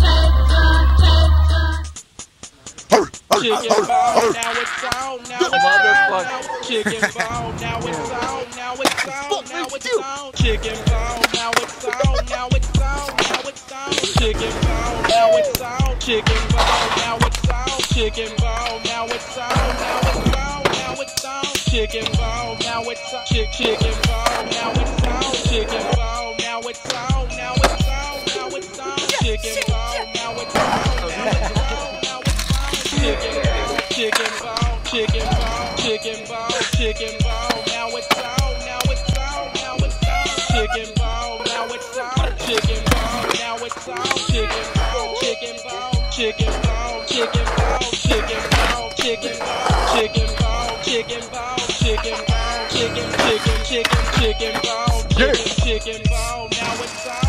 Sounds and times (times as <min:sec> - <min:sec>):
Music: 0:00.0 - 0:57.2.